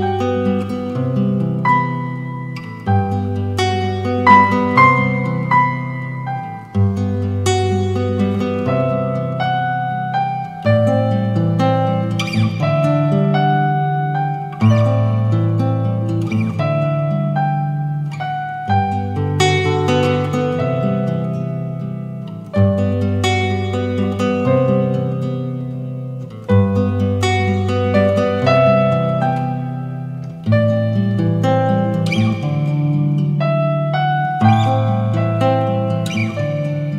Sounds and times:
Keyboard (musical): 0.0 - 36.9.

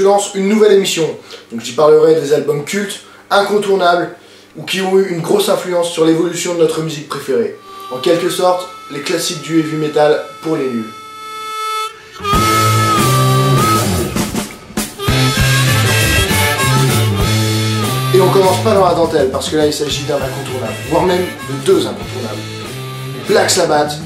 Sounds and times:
Speech: 0.0 - 11.0, 18.1 - 22.5, 23.2 - 24.0
Music: 7.1 - 24.0.

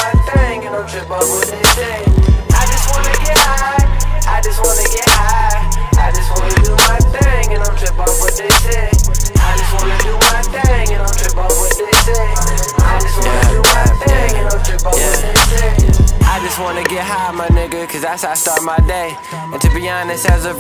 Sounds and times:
Music: 0.0 - 20.6.

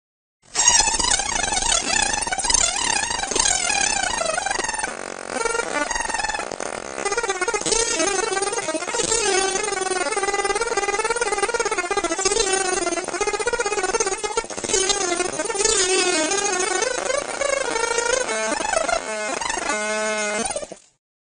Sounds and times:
Sound effect: 0.5 - 21.0.

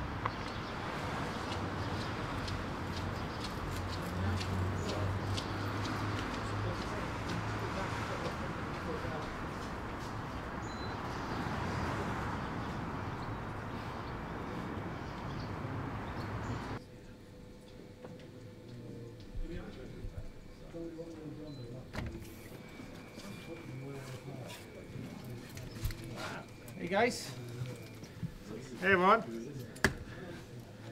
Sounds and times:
Speech: 3.9 - 5.6, 6.2 - 9.7, 16.8 - 22.5, 23.1 - 30.9.

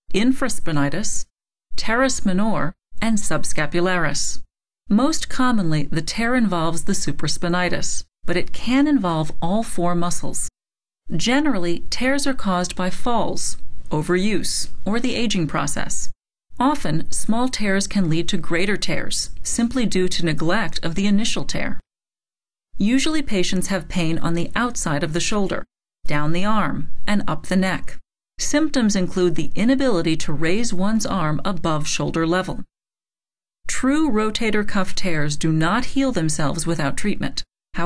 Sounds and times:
Speech: 0.1 - 10.5, 11.1 - 21.8, 22.8 - 32.7, 33.7 - 37.8.

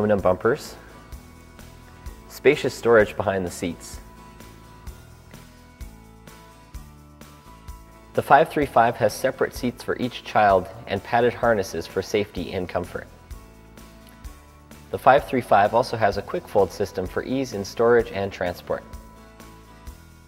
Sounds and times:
Speech: 0.0 - 0.8, 2.3 - 4.0, 8.2 - 13.1, 14.9 - 18.9
Music: 0.0 - 20.2.

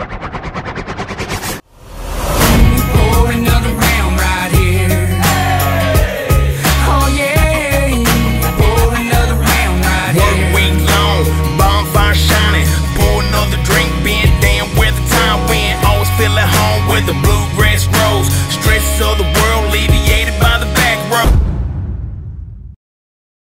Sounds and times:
Rhythm and blues: 2.3 - 21.4.

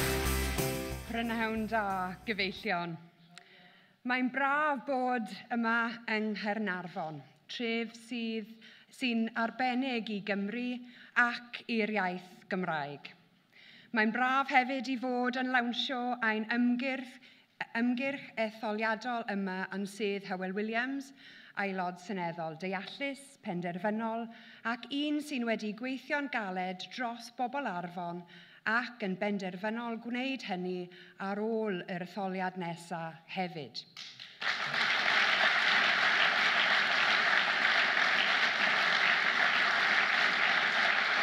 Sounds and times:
Narration, monologue: 0.7 - 34.4
Female speech, woman speaking: 1.1 - 3.1, 4.1 - 13.2, 14.0 - 33.9.

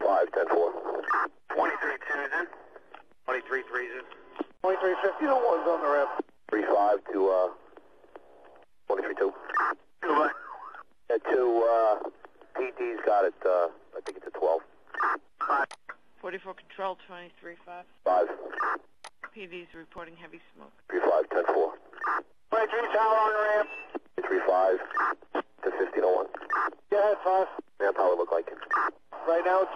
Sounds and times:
Speech: 8.9 - 9.4, 11.1 - 14.6, 22.5 - 24.9, 26.9 - 29.7.

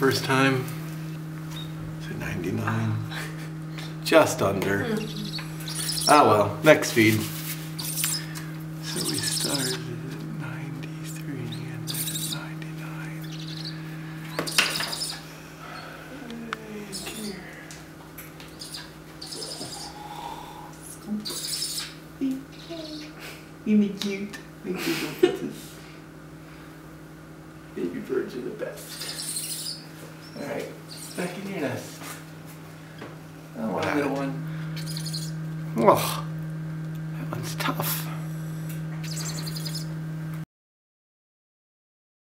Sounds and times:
Speech: 4.0 - 5.3, 6.1 - 7.3, 8.8 - 13.2, 27.8 - 28.8, 33.6 - 34.4, 35.8 - 36.3, 37.2 - 38.2
Bird: 5.0 - 6.3, 7.8 - 9.8, 11.0 - 16.0, 16.9 - 17.4, 18.5 - 22.0, 28.8 - 31.4, 34.8 - 35.4, 39.0 - 39.9.

